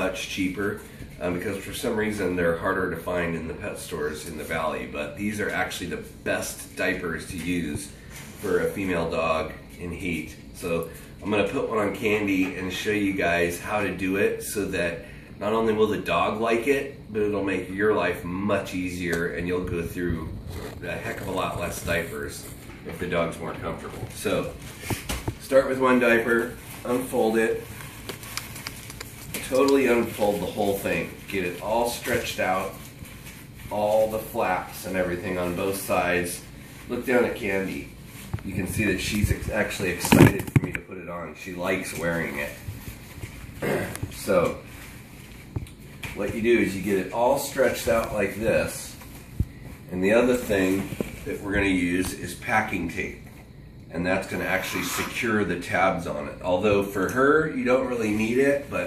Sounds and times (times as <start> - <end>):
Speech: 0.0 - 24.6, 25.4 - 27.8, 29.4 - 32.9, 33.7 - 42.7, 43.6 - 44.7, 46.1 - 49.0, 49.9 - 53.2, 53.9 - 58.8.